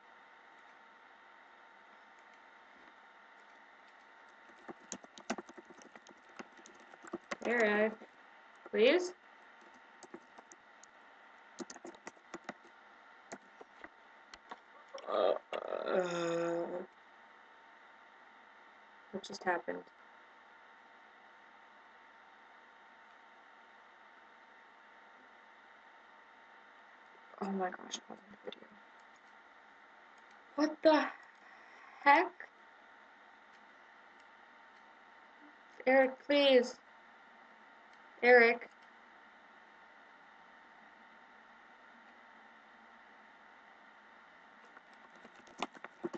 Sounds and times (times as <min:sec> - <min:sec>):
Speech: 0:07.4 - 0:08.0, 0:08.8 - 0:09.2, 0:15.0 - 0:16.9, 0:19.2 - 0:19.8, 0:27.4 - 0:28.6, 0:30.6 - 0:31.2, 0:32.0 - 0:32.4, 0:35.8 - 0:36.8, 0:38.2 - 0:38.7.